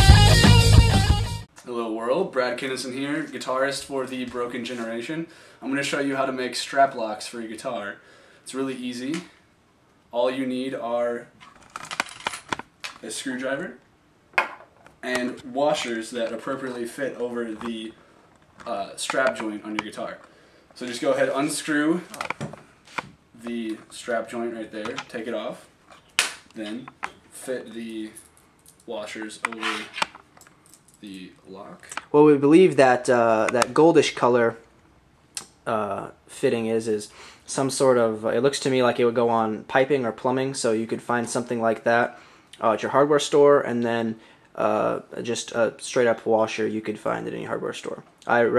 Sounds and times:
Speech: 1.6s - 9.4s, 10.1s - 11.3s, 13.0s - 13.8s, 15.0s - 18.0s, 18.6s - 20.2s, 20.8s - 22.3s, 23.4s - 25.7s, 26.6s - 28.2s, 28.9s - 30.0s, 31.0s - 34.6s, 35.6s - 48.5s.

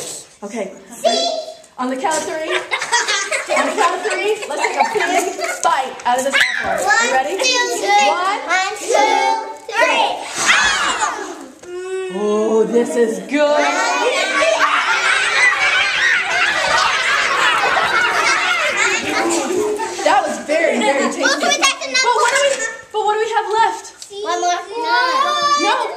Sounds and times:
Inside, large room or hall: 0.0s - 25.9s
Child speech, kid speaking: 0.9s - 2.6s, 3.5s - 11.4s, 12.1s - 14.8s, 18.2s - 25.9s.

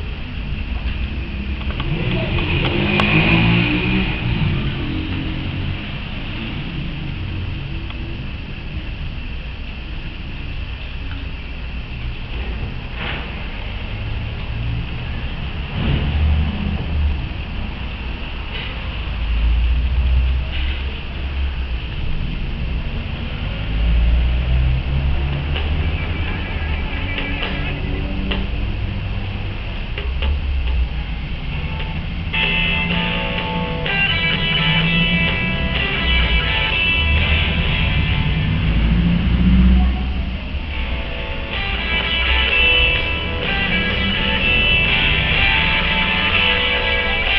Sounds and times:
Outside, urban or manmade: 0.0s - 47.3s.

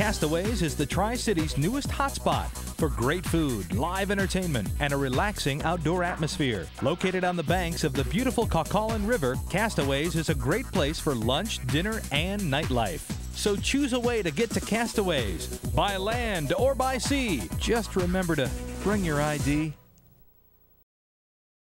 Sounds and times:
Speech: 0.0s - 19.8s
Music: 0.0s - 20.0s.

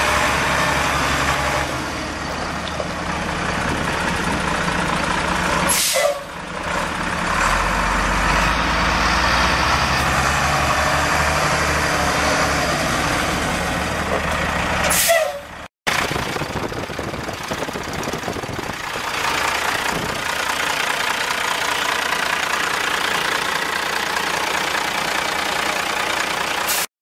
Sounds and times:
Vehicle: 0.0s - 26.9s.

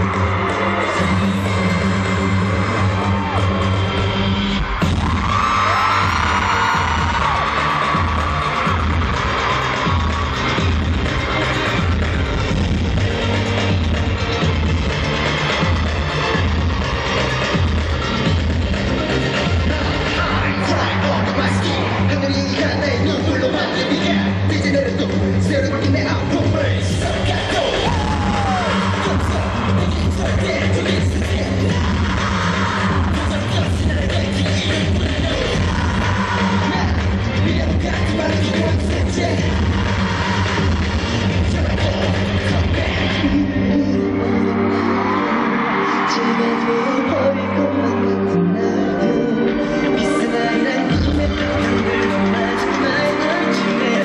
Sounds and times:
Inside, large room or hall: 0.0s - 54.0s
Music: 0.0s - 54.0s
Singing: 0.0s - 54.0s.

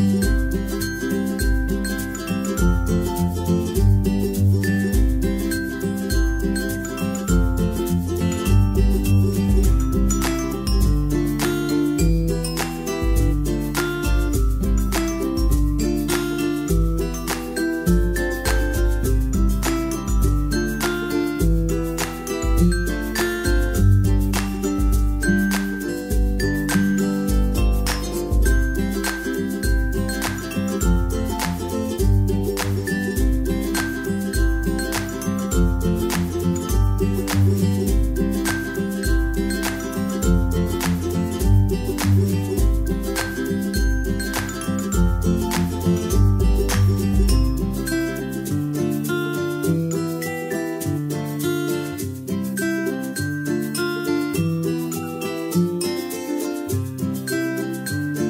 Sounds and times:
Music: 0.0s - 58.2s.

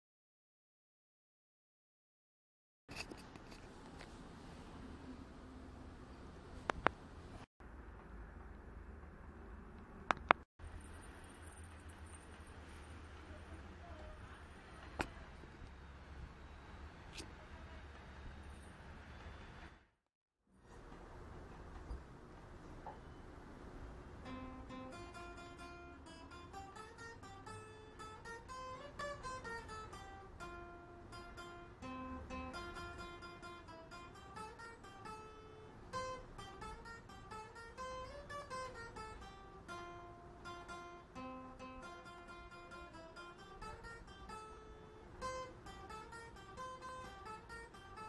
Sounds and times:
Acoustic guitar: 24.2s - 48.0s
Strum: 24.2s - 48.0s.

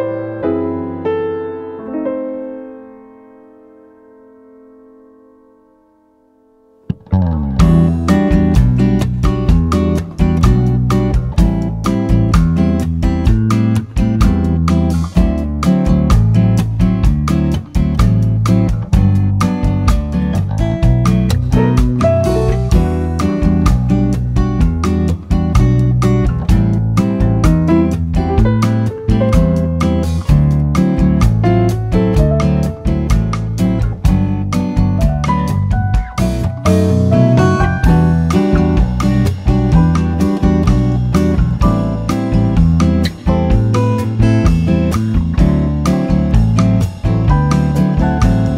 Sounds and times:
Electric piano: 0.0s - 48.5s.

